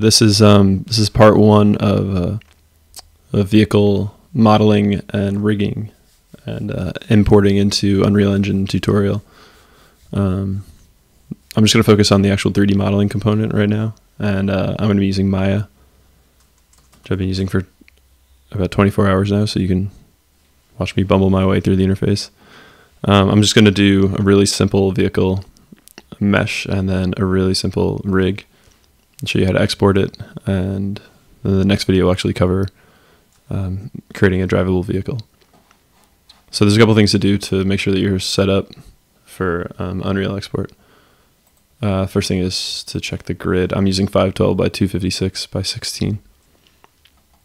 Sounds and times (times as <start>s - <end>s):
Speech: 0.0s - 2.5s, 3.3s - 9.3s, 10.1s - 15.8s, 17.0s - 17.8s, 18.5s - 20.1s, 20.8s - 22.4s, 23.0s - 28.5s, 29.2s - 32.8s, 33.5s - 35.4s, 36.5s - 40.8s, 41.8s - 46.3s.